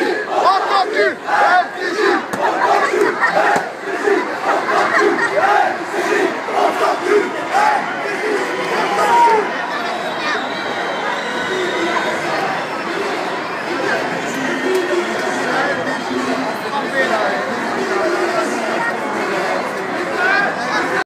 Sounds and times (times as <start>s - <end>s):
Speech: 0.0s - 21.0s.